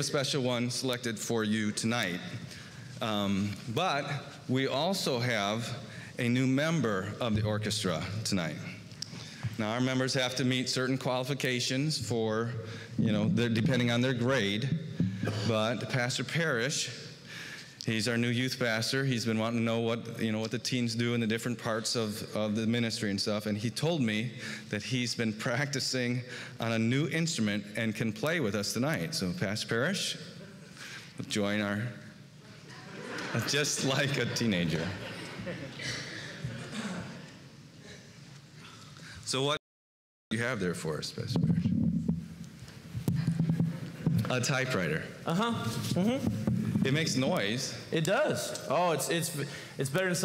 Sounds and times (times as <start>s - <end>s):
Speech: 0.0s - 2.4s, 3.0s - 8.8s, 9.6s - 17.0s, 17.8s - 30.2s, 31.2s - 32.0s, 32.7s - 35.1s, 39.3s - 39.6s, 40.3s - 41.7s, 44.2s - 50.2s.